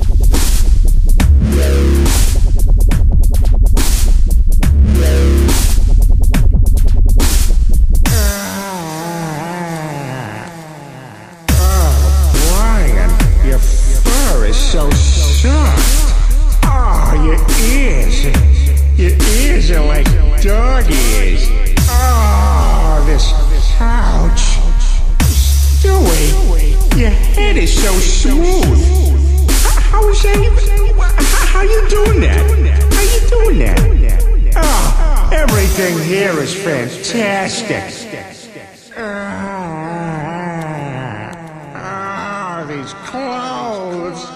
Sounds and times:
Dubstep: 0.0 - 6.1, 7.2 - 37.7.

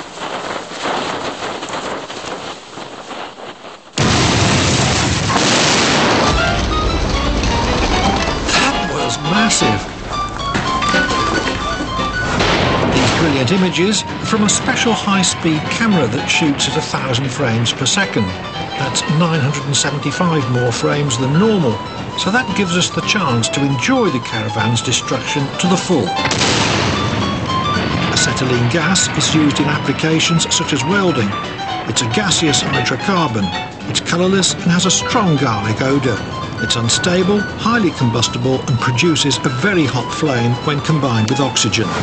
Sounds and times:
Explosion: 4.0 - 11.2, 12.4 - 13.7, 26.3 - 29.9.

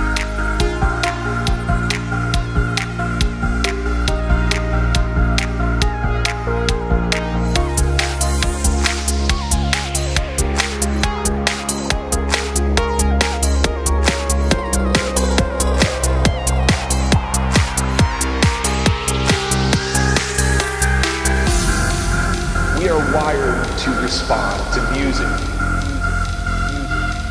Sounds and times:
Rhythm and blues: 0.0 - 27.3.

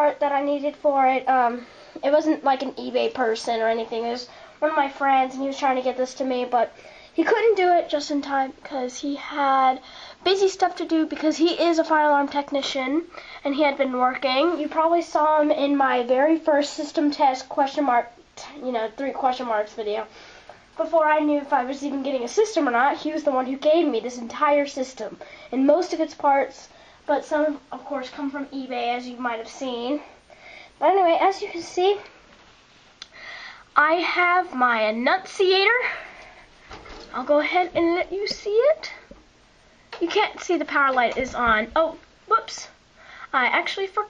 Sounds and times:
Speech: 0.0 - 20.1, 20.8 - 30.2, 30.8 - 32.1, 33.8 - 36.1, 37.1 - 39.1, 40.0 - 44.0.

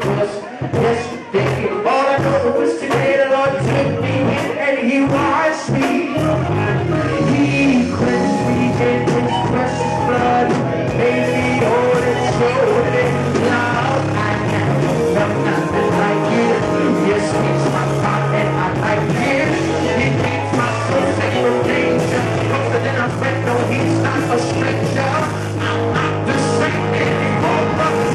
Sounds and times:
Soul music: 0.0 - 28.1.

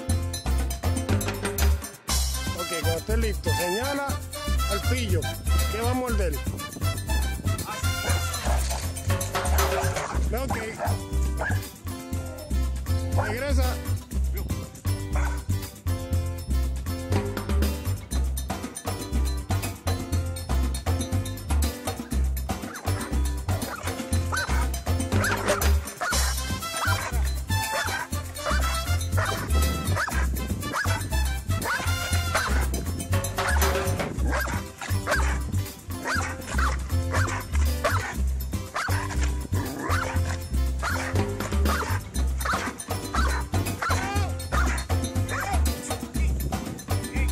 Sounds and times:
Music: 0.0 - 47.3
Bow-wow: 7.7 - 8.9, 9.6 - 11.7, 15.1 - 15.5, 22.6 - 32.8, 33.4 - 45.6
Yip: 9.6 - 11.7, 15.2 - 15.4, 22.7 - 32.7, 33.4 - 35.4, 36.0 - 45.6.

